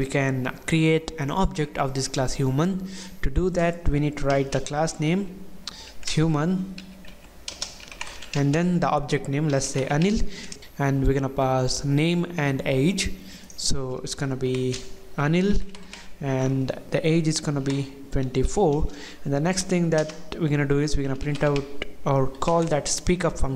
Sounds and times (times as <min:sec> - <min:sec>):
Speech: 0:00.0 - 0:05.3, 0:06.0 - 0:06.7, 0:08.4 - 0:23.5
Computer keyboard: 0:06.8 - 0:08.5, 0:21.1 - 0:22.8.